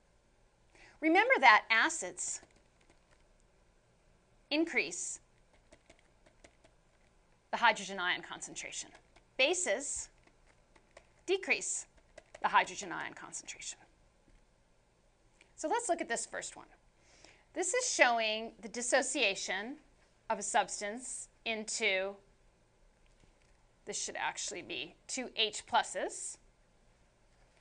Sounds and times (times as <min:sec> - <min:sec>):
Speech: 0:01.0 - 0:02.4, 0:04.5 - 0:05.2, 0:07.6 - 0:10.1, 0:11.3 - 0:13.9, 0:15.6 - 0:16.8, 0:17.6 - 0:22.2, 0:23.9 - 0:26.4.